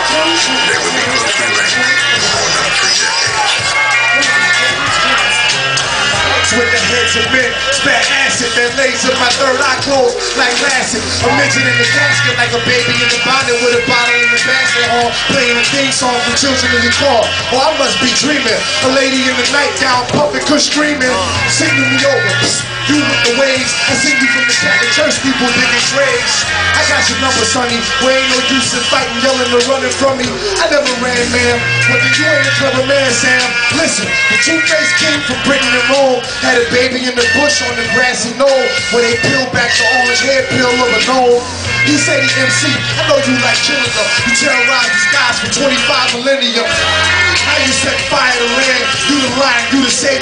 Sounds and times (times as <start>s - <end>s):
Electronica: 0.0s - 50.2s.